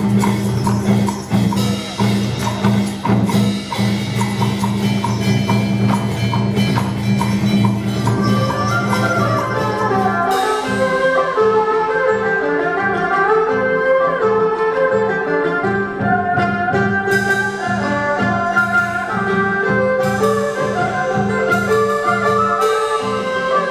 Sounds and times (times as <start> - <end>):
Music: 0.0 - 23.7.